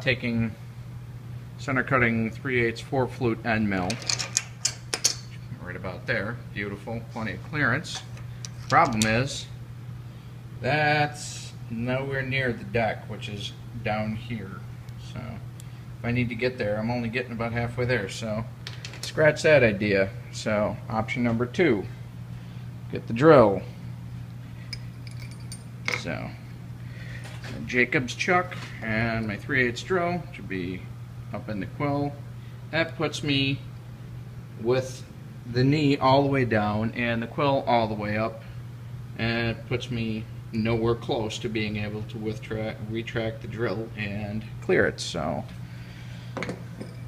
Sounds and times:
Speech: 0.0 - 0.6, 1.6 - 4.0, 5.5 - 8.1, 8.7 - 9.6, 10.6 - 15.4, 16.0 - 18.5, 19.1 - 22.0, 22.9 - 23.7, 25.9 - 26.4, 27.5 - 33.7, 34.6 - 38.4, 39.2 - 45.6.

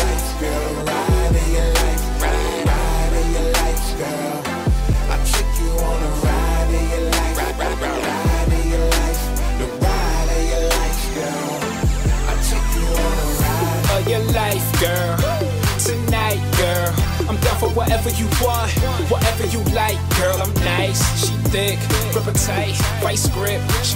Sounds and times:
Pop music: 0.0 - 23.9.

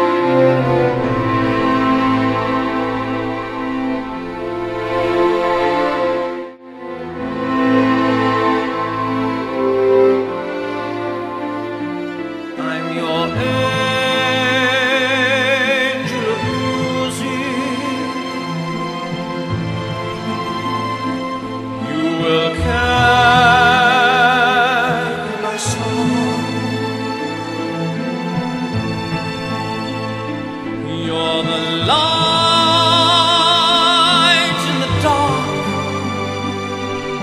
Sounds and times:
Opera: 0.0 - 37.2.

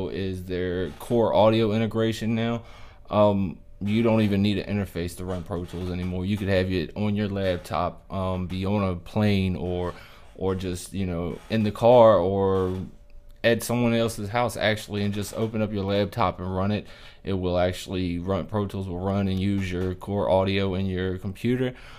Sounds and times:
Speech: 0.0 - 21.8.

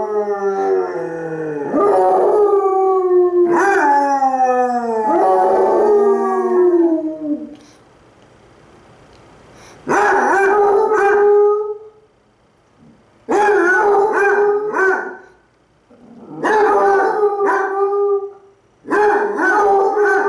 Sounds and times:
Bark: 9.9 - 11.3, 13.3 - 15.4, 16.4 - 17.8, 18.9 - 20.2.

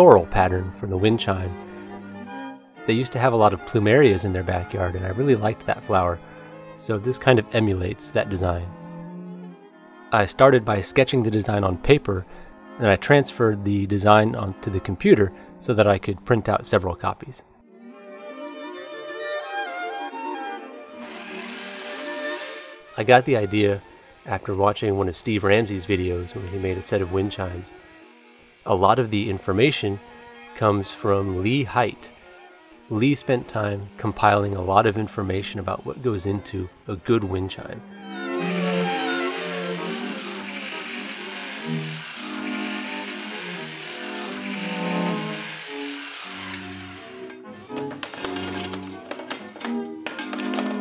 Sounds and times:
Speech: 0.0 - 1.6, 2.9 - 6.2, 6.8 - 8.7, 10.2 - 17.5, 23.0 - 27.7, 28.7 - 30.0, 30.6 - 32.1, 32.9 - 37.8
Music: 0.0 - 50.8.

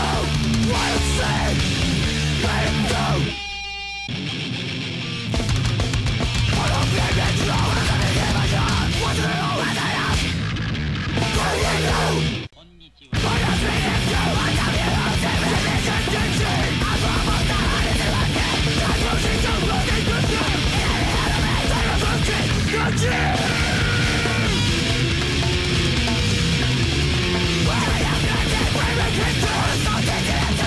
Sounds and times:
Yell: 0.0 - 3.4, 6.6 - 10.2, 11.2 - 12.3, 13.1 - 24.7, 27.6 - 30.6
Music: 0.0 - 30.6.

